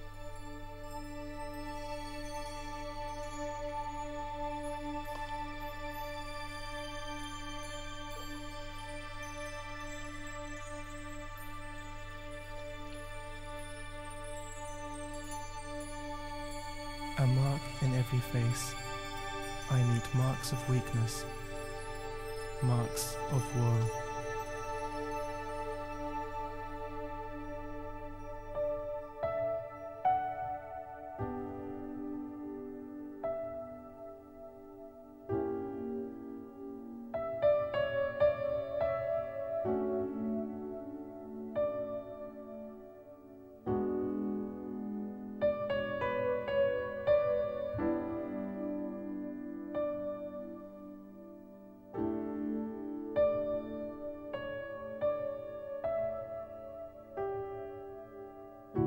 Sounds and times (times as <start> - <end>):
Music: 0.0 - 58.8.